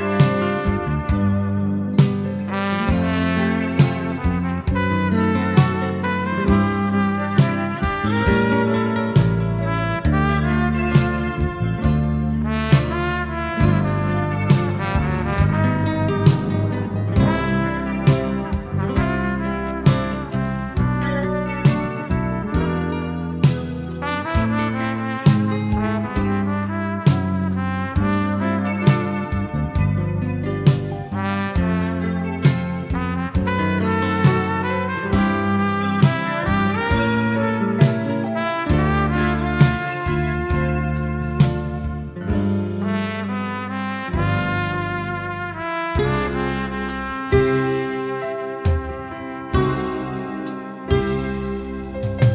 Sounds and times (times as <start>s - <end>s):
Music: 0.0s - 52.3s.